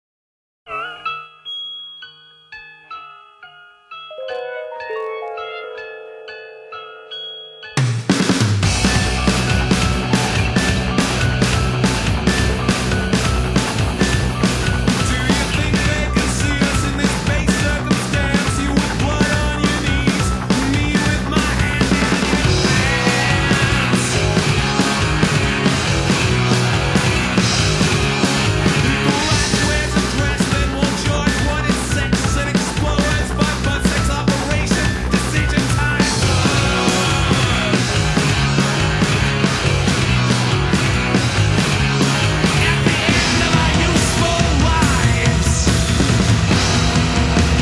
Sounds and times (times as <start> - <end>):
Marimba, xylophone: 0.7 - 8.4
Chime: 0.7 - 8.5
Glockenspiel: 0.7 - 20.5.